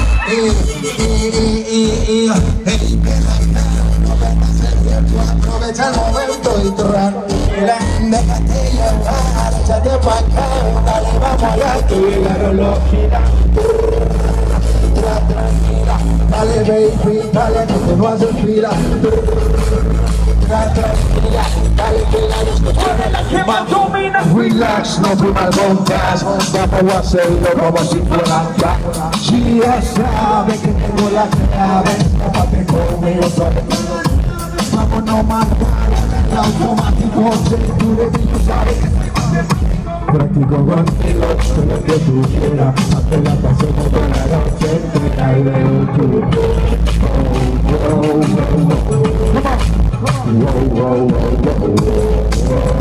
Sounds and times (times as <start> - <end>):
Music: 0.0 - 52.8.